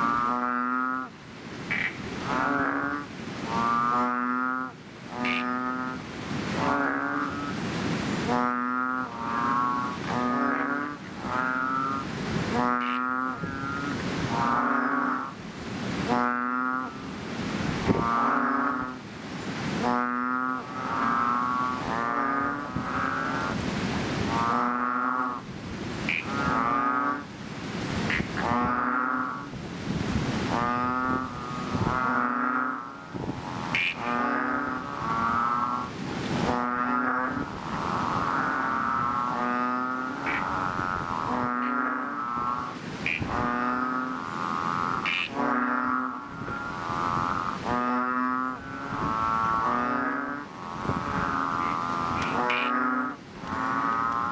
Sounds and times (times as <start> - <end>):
Frog: 0.0 - 15.4, 16.0 - 17.2, 17.8 - 27.3, 27.9 - 29.6, 30.3 - 54.3.